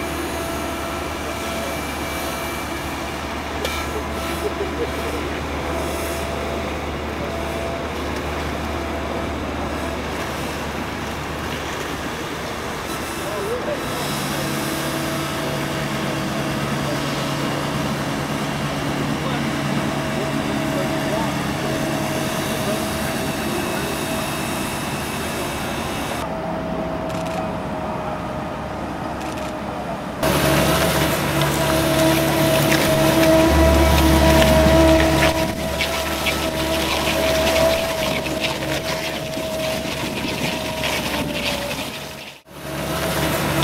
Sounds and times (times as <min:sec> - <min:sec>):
Motorboat, speedboat: 0:00.0 - 0:43.6
Speech: 0:12.1 - 0:17.7, 0:19.0 - 0:26.3.